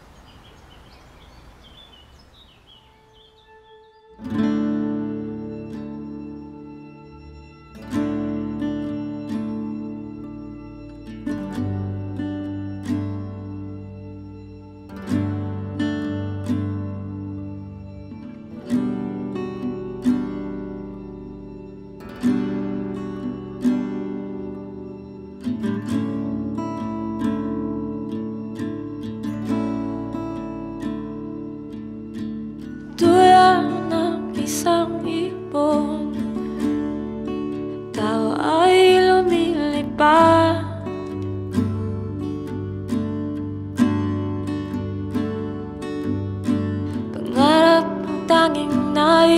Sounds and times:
Music: 2.7 - 49.3.

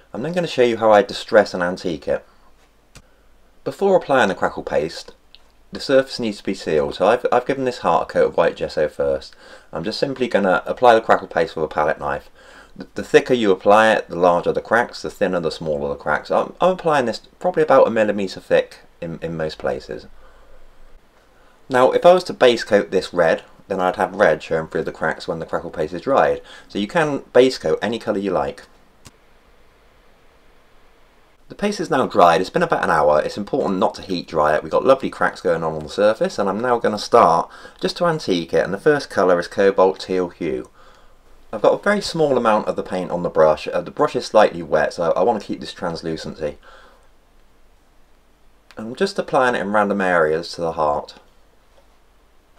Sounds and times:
Speech: 0.1 - 2.3, 3.6 - 20.1, 21.7 - 28.7, 31.5 - 40.8, 41.5 - 46.6, 48.7 - 51.3.

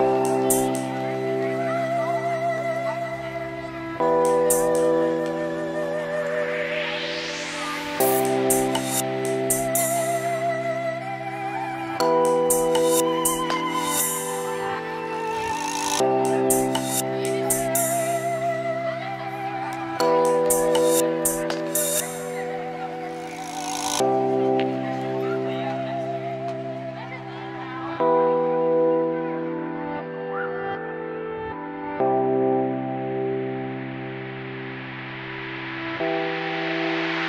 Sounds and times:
Dubstep: 3.5 - 11.0, 11.8 - 24.8.

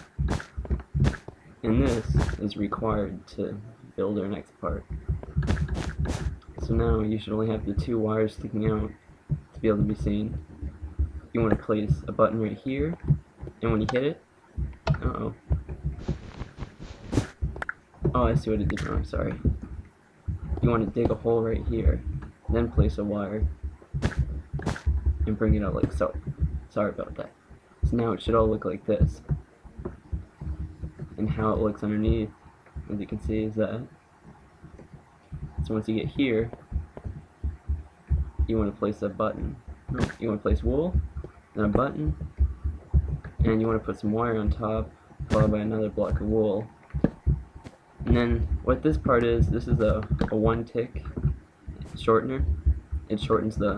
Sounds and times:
Speech: 1.7 - 4.8, 6.6 - 9.0, 9.6 - 10.4, 11.3 - 13.0, 13.6 - 14.2, 14.9 - 15.4, 18.1 - 19.5, 20.6 - 23.5, 25.3 - 29.2, 31.2 - 33.9, 35.6 - 36.6, 38.5 - 41.0, 41.6 - 42.2, 43.4 - 46.7, 48.1 - 51.1, 51.9 - 52.5, 53.1 - 53.7.

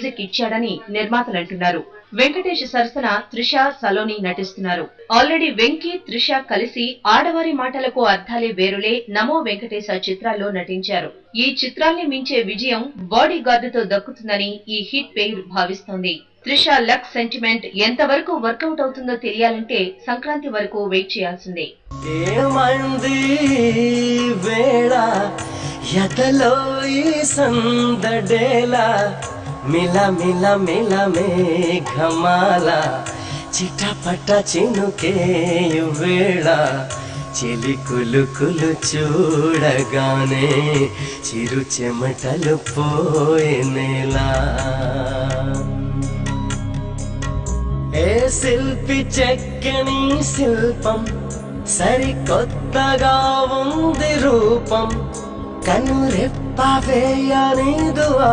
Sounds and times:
Carnatic music: 21.9 - 58.3.

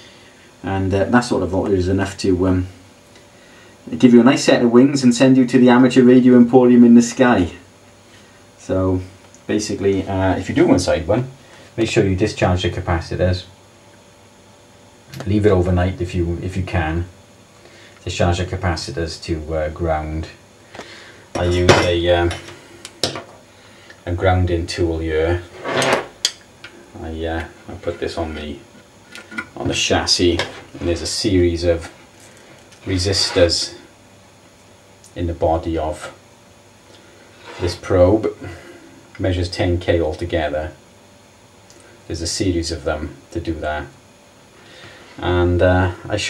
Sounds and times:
Speech: 0.6 - 2.8, 3.9 - 7.7, 8.6 - 13.6, 15.1 - 17.2, 18.0 - 20.4, 21.4 - 22.5, 24.0 - 25.5, 26.9 - 28.7, 29.5 - 32.0, 32.8 - 33.9, 35.1 - 36.2, 37.5 - 38.6, 39.2 - 40.8, 42.1 - 44.0, 45.2 - 46.2.

